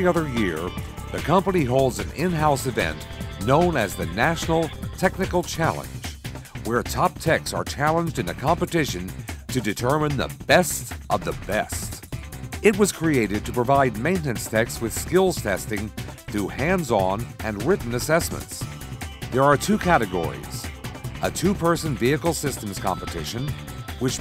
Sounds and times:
Speech: 0.0 - 12.0, 12.6 - 18.6, 19.4 - 24.2
Music: 0.0 - 24.2.

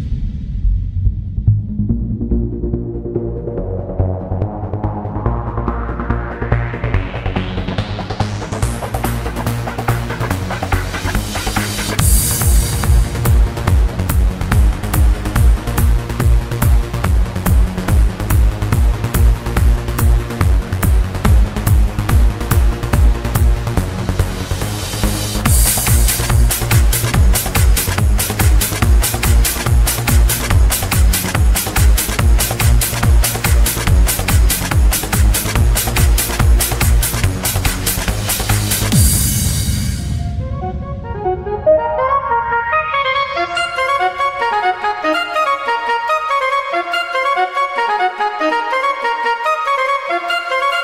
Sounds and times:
Techno: 1.5 - 50.8.

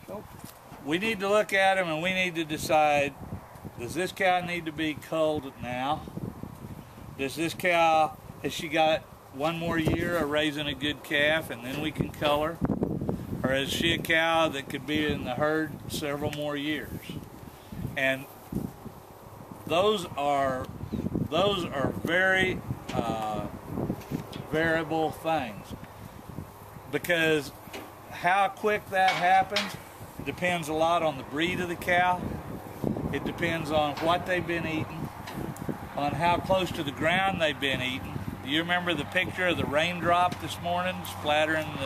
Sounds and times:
Speech: 0.0 - 3.2, 3.8 - 6.1, 7.2 - 12.6, 13.4 - 17.2, 18.0 - 18.3, 19.7 - 20.7, 21.3 - 23.5, 24.5 - 25.8, 26.9 - 27.6, 28.2 - 32.3, 33.1 - 35.1, 36.0 - 41.8.

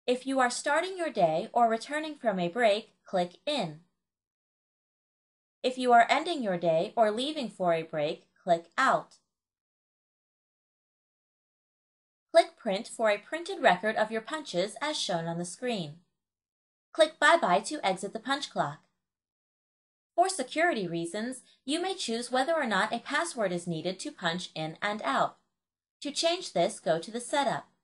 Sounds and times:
Speech: 0.1 - 3.9, 5.7 - 9.2, 12.4 - 16.1, 17.0 - 18.8, 20.2 - 25.4, 26.0 - 27.8.

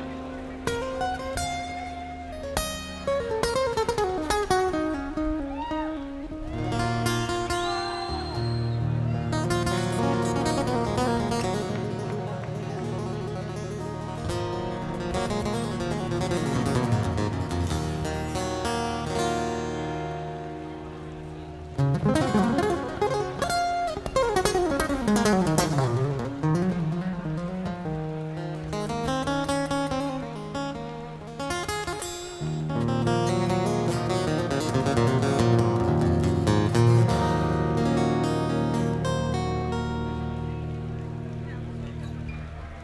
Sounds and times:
Music: 0.0 - 42.8.

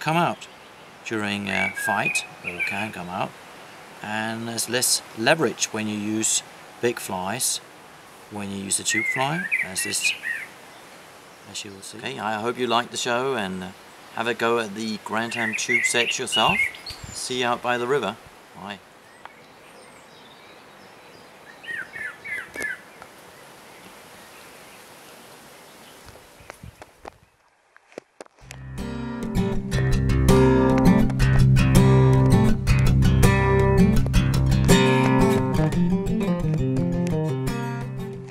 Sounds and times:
Music: 28.5 - 38.3.

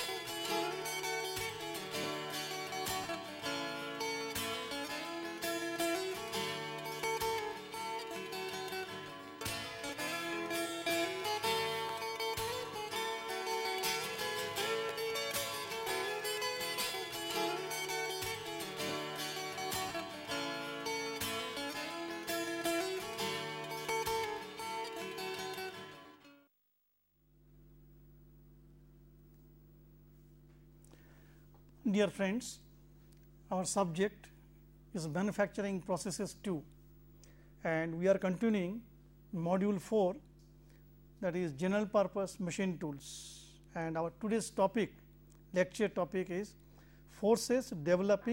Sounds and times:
Music: 0.0 - 26.5.

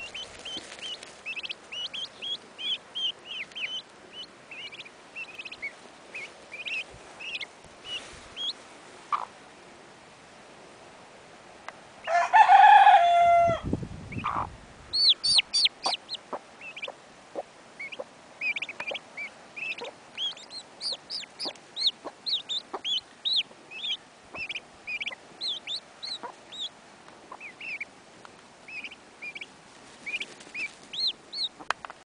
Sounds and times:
Bird: 0.0 - 9.3, 14.1 - 26.7, 27.3 - 27.9, 28.7 - 31.8.

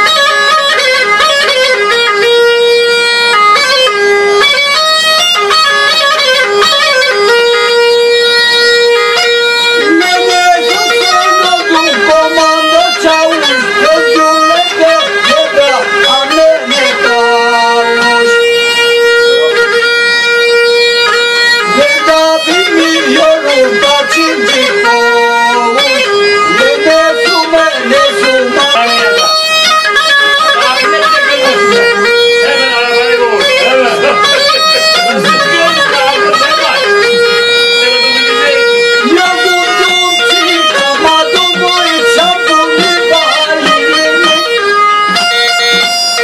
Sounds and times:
Bagpipes: 0.0 - 46.2.

